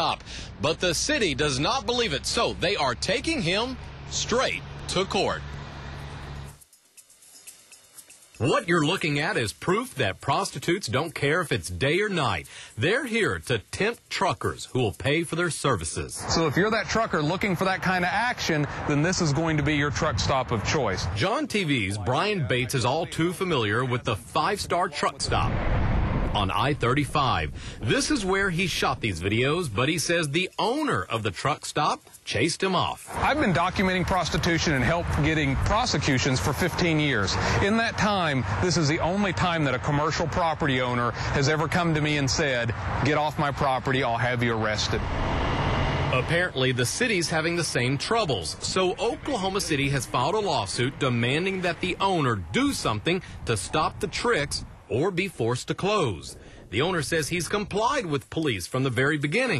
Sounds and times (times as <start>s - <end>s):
Speech: 0.0s - 5.4s, 8.4s - 25.6s, 26.4s - 45.0s, 46.1s - 59.5s.